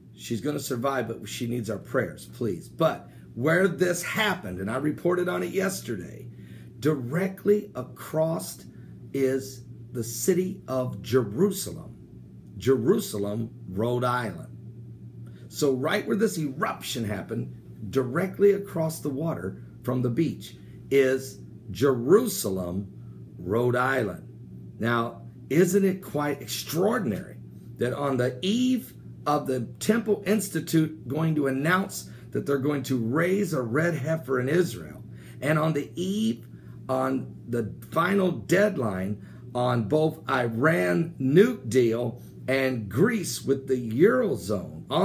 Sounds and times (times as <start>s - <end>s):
Speech: 0.2s - 12.0s, 12.6s - 14.5s, 15.5s - 45.0s.